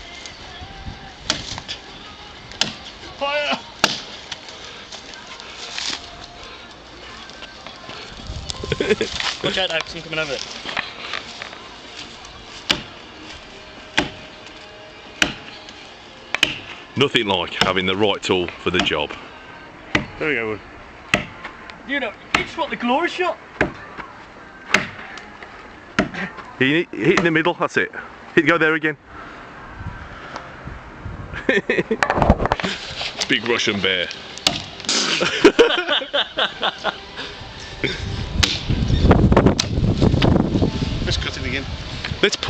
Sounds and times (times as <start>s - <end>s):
Chop: 2.6s - 2.8s, 3.8s - 4.1s, 12.7s - 12.9s, 14.0s - 14.2s, 15.2s - 15.5s, 16.3s - 16.8s, 21.1s - 21.4s, 24.7s - 25.0s, 26.0s - 26.2s, 34.4s - 35.2s, 38.4s - 38.7s.